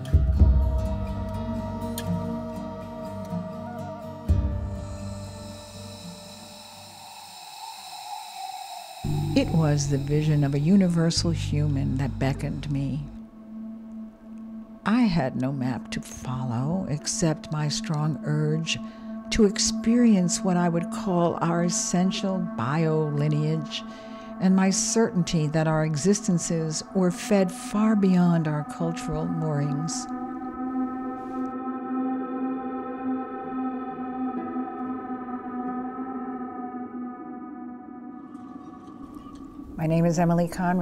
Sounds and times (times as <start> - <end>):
Music: 0.0 - 8.1, 9.0 - 40.8
Speech: 9.4 - 13.2, 14.9 - 18.8, 19.4 - 23.8, 24.4 - 30.1, 39.8 - 40.8.